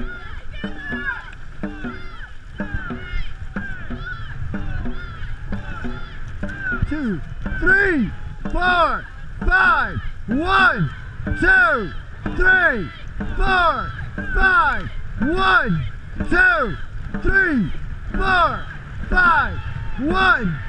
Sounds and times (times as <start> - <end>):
Boat, Water vehicle: 0.0 - 20.6
Speech: 6.7 - 18.6, 19.2 - 20.6.